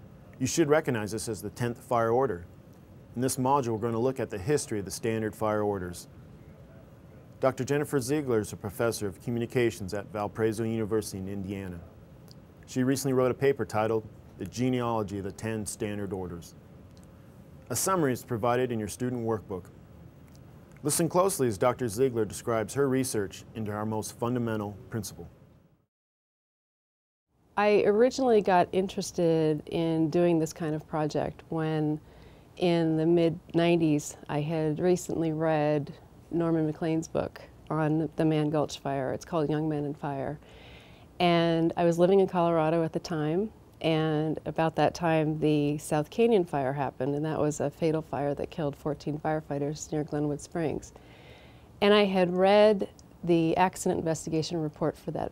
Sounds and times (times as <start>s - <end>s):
Speech: 0.4s - 2.5s, 3.2s - 6.8s, 7.4s - 11.9s, 12.7s - 16.5s, 17.7s - 19.7s, 20.8s - 25.3s, 27.6s - 32.0s, 32.6s - 40.4s, 41.2s - 50.9s, 51.8s - 55.3s.